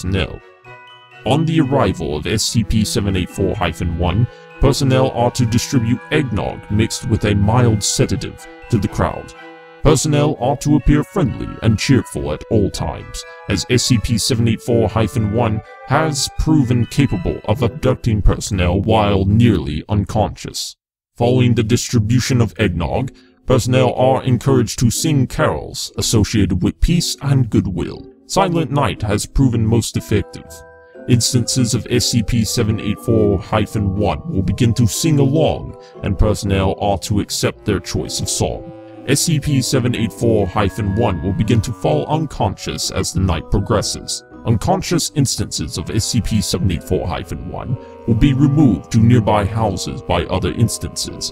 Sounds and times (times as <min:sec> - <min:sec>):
Speech: 0:00.0 - 0:00.4, 0:01.2 - 0:51.3
Music: 0:00.0 - 0:20.4, 0:21.2 - 0:51.3.